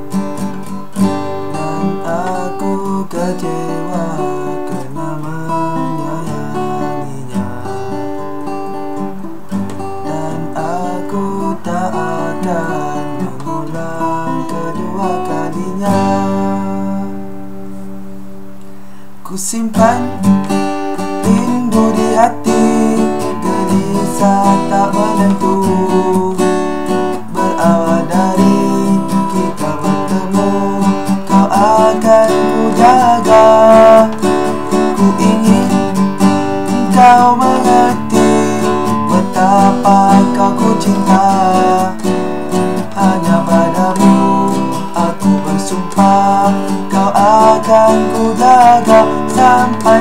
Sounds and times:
Acoustic guitar: 0:00.0 - 0:50.0
Country: 0:00.0 - 0:50.0
Strum: 0:00.0 - 0:50.0.

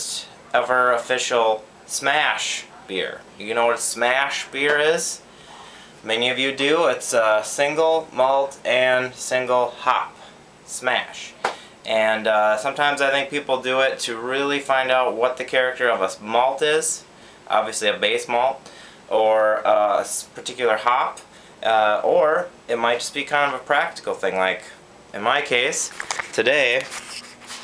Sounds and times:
Speech: 0:00.0 - 0:05.2, 0:06.0 - 0:27.0.

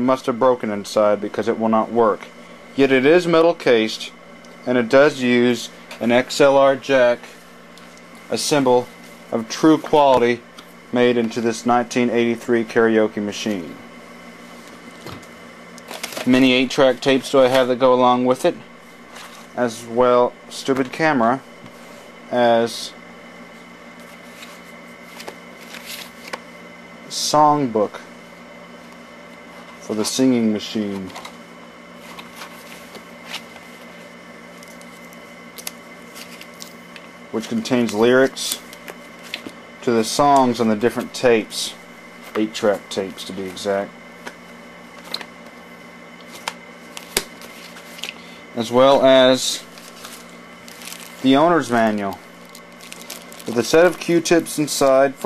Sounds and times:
Speech: 0:00.0 - 0:07.3, 0:08.3 - 0:13.8, 0:16.2 - 0:18.7, 0:19.6 - 0:21.5, 0:22.3 - 0:23.0, 0:27.1 - 0:28.1, 0:29.8 - 0:31.2, 0:37.3 - 0:38.6, 0:39.8 - 0:43.9, 0:48.6 - 0:49.7, 0:51.2 - 0:52.2, 0:53.4 - 0:55.2.

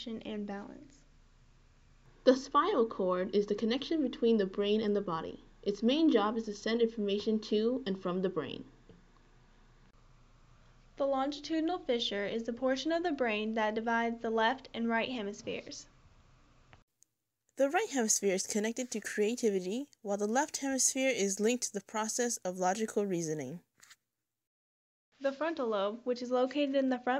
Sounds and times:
Speech: 0:00.0 - 0:01.0, 0:02.3 - 0:08.7, 0:11.0 - 0:15.9, 0:17.6 - 0:23.6, 0:25.2 - 0:27.2.

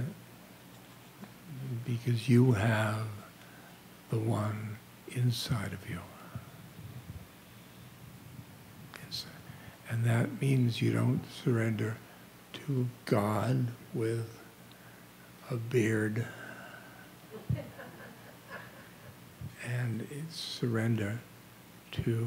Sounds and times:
Speech: 0:01.5 - 0:03.3, 0:04.1 - 0:06.2, 0:09.0 - 0:14.4, 0:15.4 - 0:16.3, 0:19.5 - 0:21.3, 0:21.9 - 0:22.2.

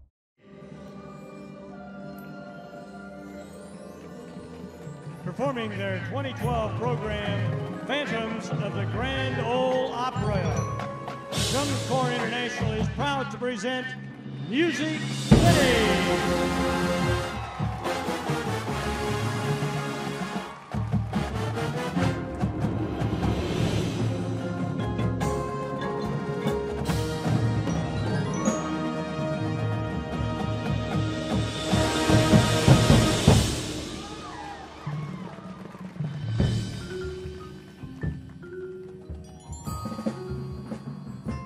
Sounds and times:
Drum: 0:10.5 - 0:13.2, 0:14.4 - 0:27.8, 0:30.3 - 0:38.5
Drum kit: 0:10.5 - 0:13.2, 0:14.3 - 0:41.4.

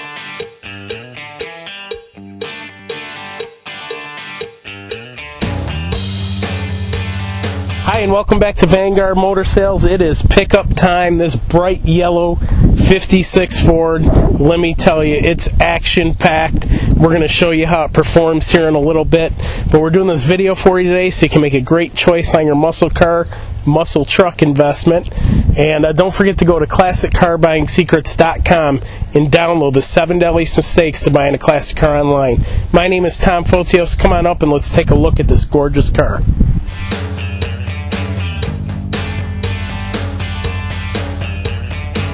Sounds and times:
Speech: 0:07.8 - 0:36.3.

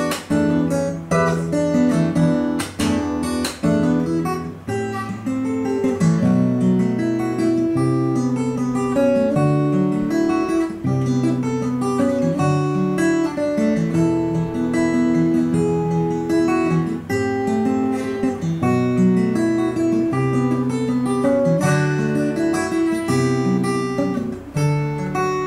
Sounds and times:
Music: 0:00.0 - 0:25.4.

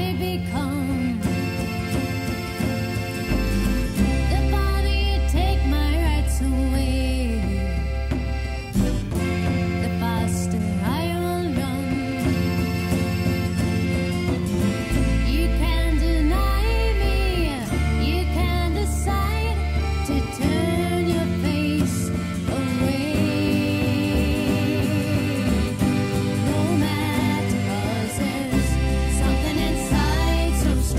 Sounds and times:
Country: 0:00.0 - 0:30.9.

